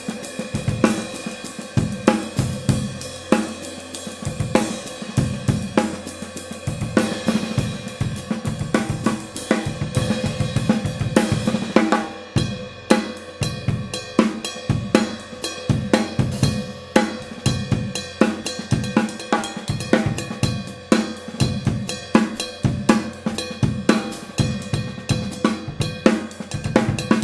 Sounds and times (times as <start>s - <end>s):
Drum kit: 0.0s - 27.2s
Bass drum: 4.2s - 6.1s, 13.4s - 27.2s.